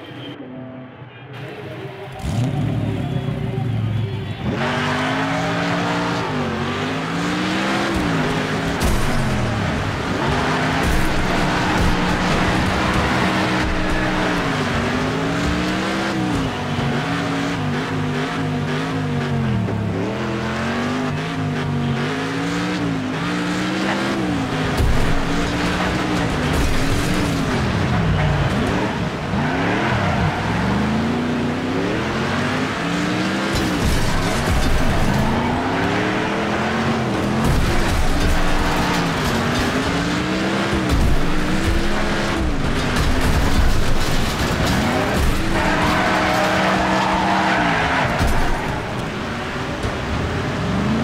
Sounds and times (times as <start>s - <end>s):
Car: 0.0s - 51.0s.